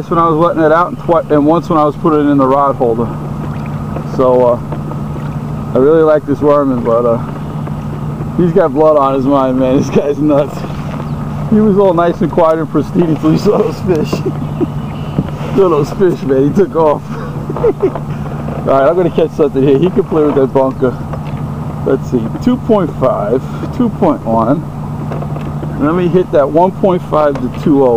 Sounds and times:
Speech: 0:00.0 - 0:03.1, 0:04.1 - 0:04.6, 0:05.7 - 0:07.3, 0:08.4 - 0:10.8, 0:11.5 - 0:14.4, 0:15.5 - 0:18.0, 0:18.6 - 0:21.0, 0:21.8 - 0:24.6, 0:25.8 - 0:27.9
Boat, Water vehicle: 0:00.0 - 0:27.9.

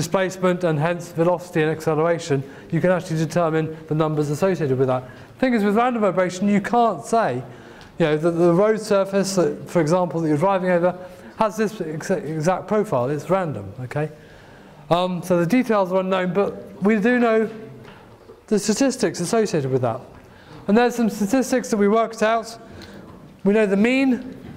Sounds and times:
Speech: 0:00.0 - 0:14.2, 0:14.9 - 0:17.8, 0:18.5 - 0:20.1, 0:20.7 - 0:22.7, 0:23.4 - 0:24.4.

